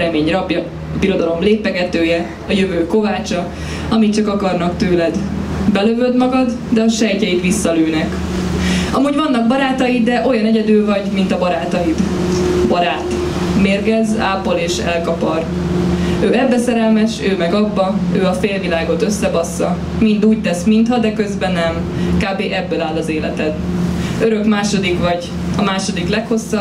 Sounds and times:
Speech: 0.0 - 8.2, 8.9 - 15.5, 16.2 - 23.6, 24.2 - 26.6.

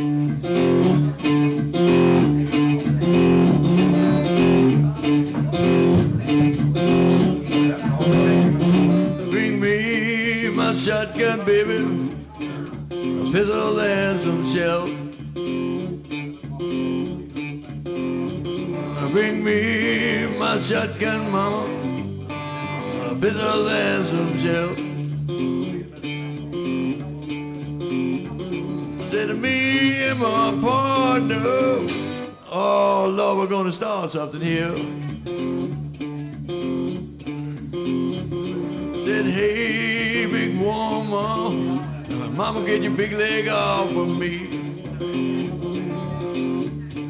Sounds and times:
Blues: 0.0 - 47.1
Speech: 4.0 - 15.1, 16.2 - 17.7, 25.6 - 27.6, 39.0 - 47.1.

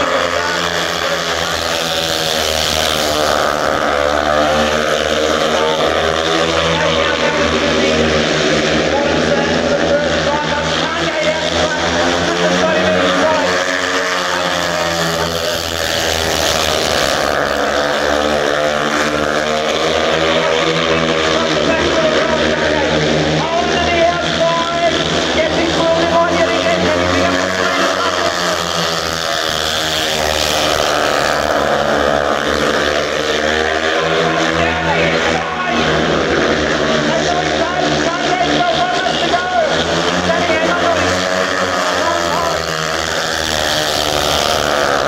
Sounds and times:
Speech: 4.2 - 15.2, 18.0 - 28.9, 33.3 - 45.0.

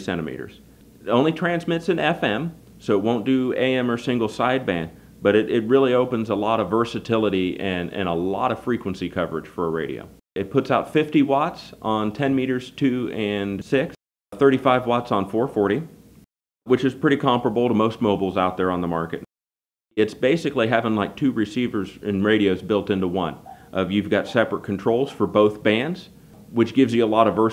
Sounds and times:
Speech: 0.0 - 16.0, 16.7 - 19.3, 20.0 - 27.5.

